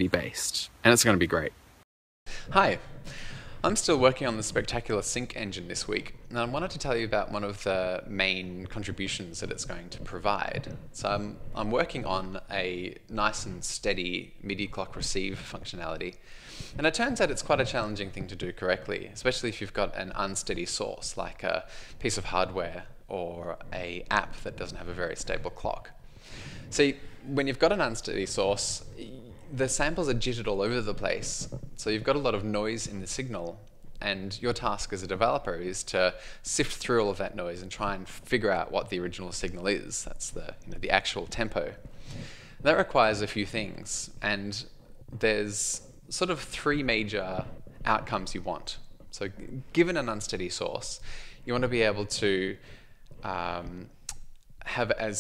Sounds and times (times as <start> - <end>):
Speech: 0.0 - 1.6, 2.5 - 2.9, 3.6 - 16.2, 16.8 - 26.0, 26.7 - 41.8, 42.6 - 52.6, 53.2 - 54.0, 54.6 - 55.2.